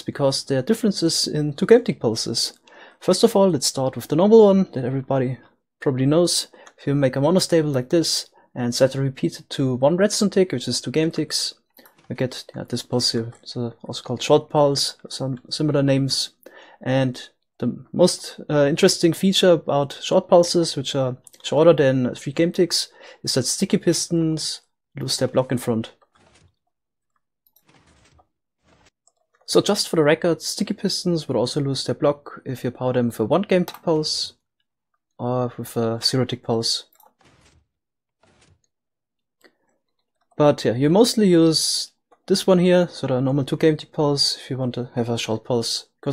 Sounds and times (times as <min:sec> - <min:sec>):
Speech: 0:00.0 - 0:26.0, 0:29.5 - 0:34.4, 0:35.2 - 0:37.0, 0:40.4 - 0:46.1.